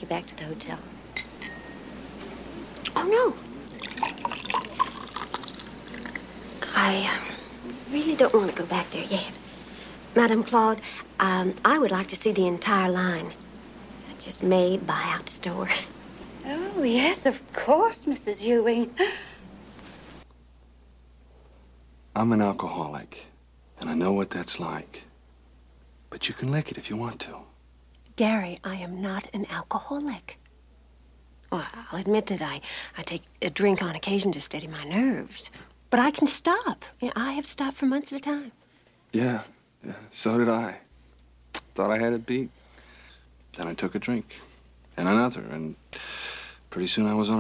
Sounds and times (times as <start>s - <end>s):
Inside, small room: 0.0s - 47.4s.